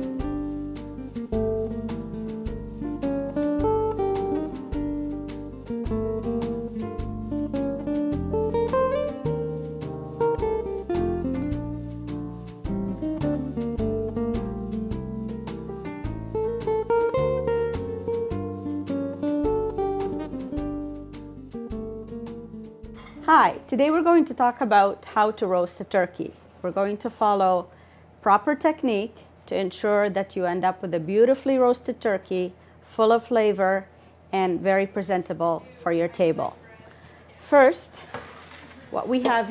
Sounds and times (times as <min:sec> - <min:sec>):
Speech: 0:23.2 - 0:38.0, 0:38.7 - 0:39.5.